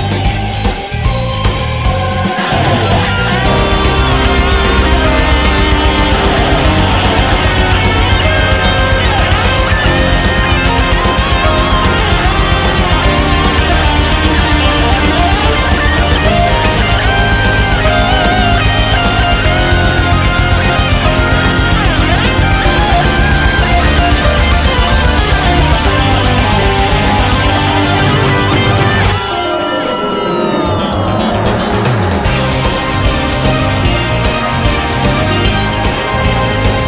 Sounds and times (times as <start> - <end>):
Music: 0.0 - 36.8.